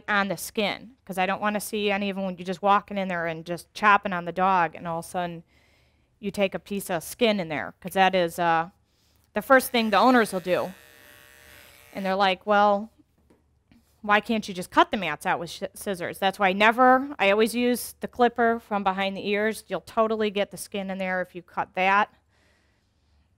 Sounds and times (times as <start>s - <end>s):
Speech: 0.0s - 5.4s, 6.2s - 8.8s, 9.4s - 10.8s, 12.0s - 13.0s, 14.1s - 22.1s.